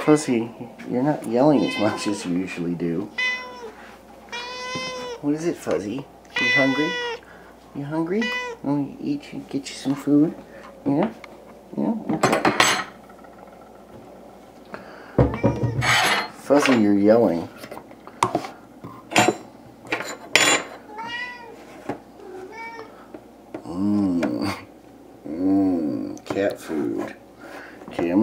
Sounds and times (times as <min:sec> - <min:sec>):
Speech: 0:00.0 - 0:03.1, 0:07.7 - 0:12.2, 0:16.4 - 0:17.5, 0:25.3 - 0:27.2, 0:27.9 - 0:28.2
Meow: 0:01.6 - 0:02.3, 0:03.2 - 0:05.2, 0:06.3 - 0:07.2, 0:08.2 - 0:08.6, 0:15.2 - 0:16.0, 0:20.9 - 0:21.6, 0:22.2 - 0:22.9.